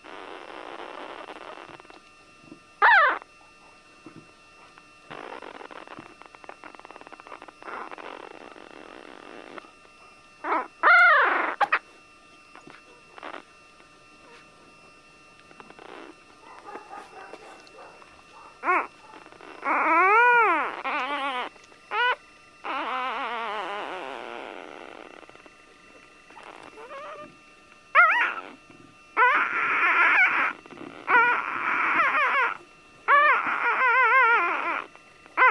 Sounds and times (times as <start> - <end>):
Dog: 2.8 - 3.8, 4.6 - 11.9, 12.5 - 13.4, 14.2 - 14.5, 15.6 - 25.4, 26.3 - 27.4, 28.0 - 28.6, 29.2 - 35.5.